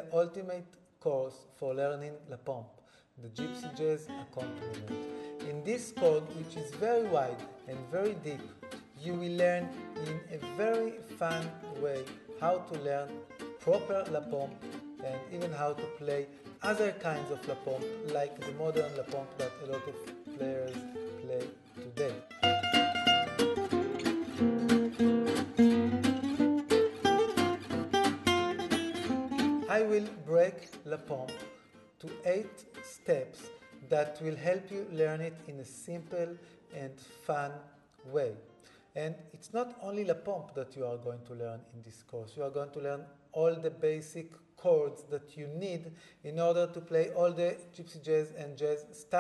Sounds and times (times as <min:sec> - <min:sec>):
Speech: 0:00.0 - 0:22.2, 0:29.6 - 0:31.4, 0:32.0 - 0:49.2
Acoustic guitar: 0:03.2 - 0:40.6, 0:42.4 - 0:49.2
Strum: 0:03.5 - 0:35.0.